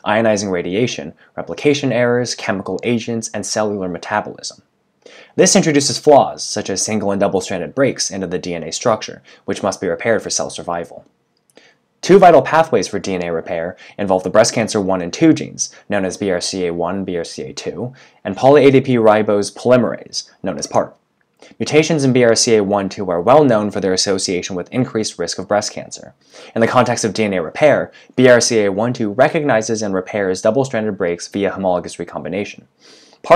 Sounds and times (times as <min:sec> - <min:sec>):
Speech: 0:00.0 - 0:04.7, 0:05.3 - 0:11.1, 0:12.0 - 0:33.3.